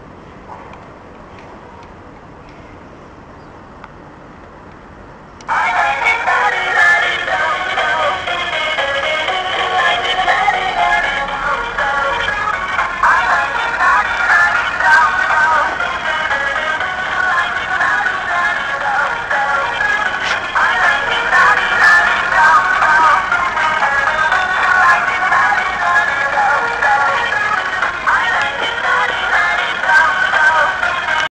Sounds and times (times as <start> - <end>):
Music: 5.4 - 31.3.